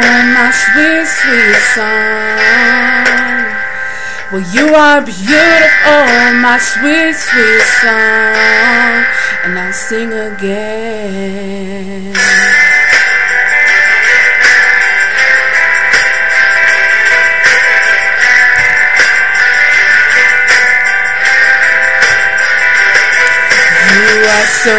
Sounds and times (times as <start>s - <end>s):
Female singing: 0.0s - 3.6s, 4.4s - 12.5s, 23.7s - 24.7s
Music: 0.0s - 24.7s.